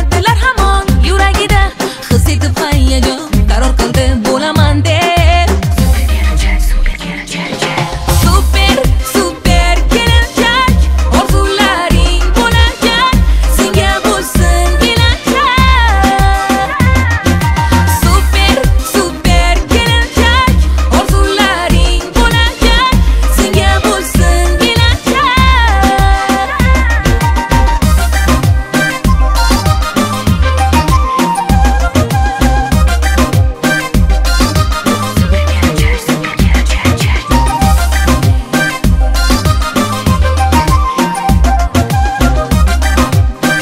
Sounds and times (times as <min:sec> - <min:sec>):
Music of Africa: 0:00.0 - 0:43.6.